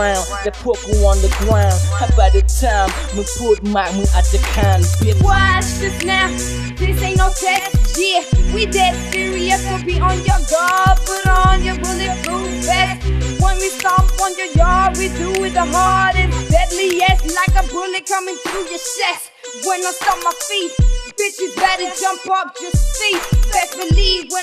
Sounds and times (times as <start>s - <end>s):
Hip hop music: 0.0s - 24.4s
Rapping: 0.0s - 24.4s.